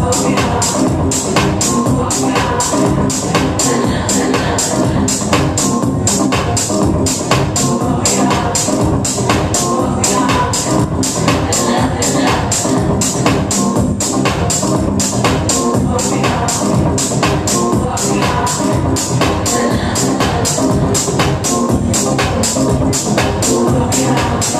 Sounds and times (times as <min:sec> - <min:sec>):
Disco: 0:00.0 - 0:24.5
Techno: 0:00.0 - 0:24.5.